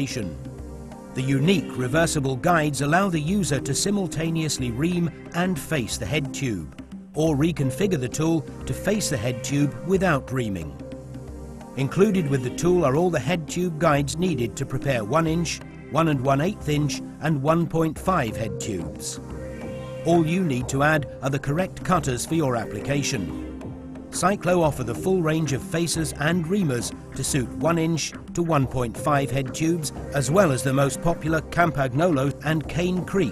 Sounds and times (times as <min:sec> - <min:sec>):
Speech: 0:00.0 - 0:00.4, 0:01.2 - 0:10.8, 0:11.8 - 0:19.2, 0:20.1 - 0:23.3, 0:24.2 - 0:33.3
Music: 0:00.0 - 0:33.3.